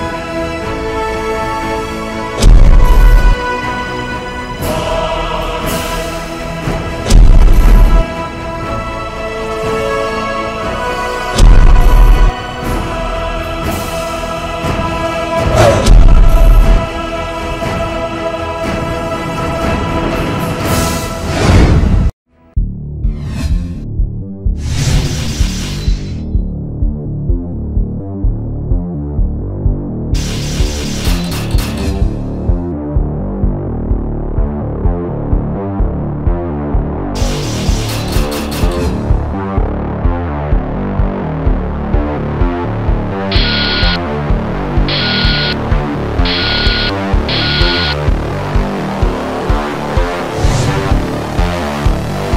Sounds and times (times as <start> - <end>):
Music: 0.0 - 52.3.